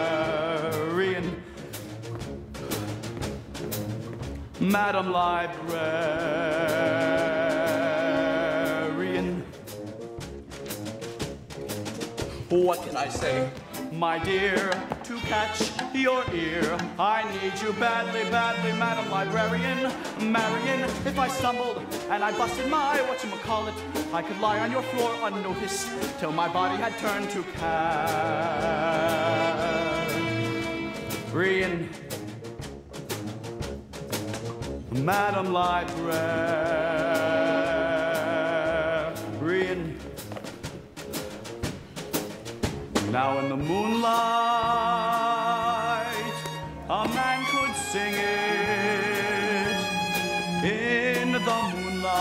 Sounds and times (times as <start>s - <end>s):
Music: 0.0s - 52.2s.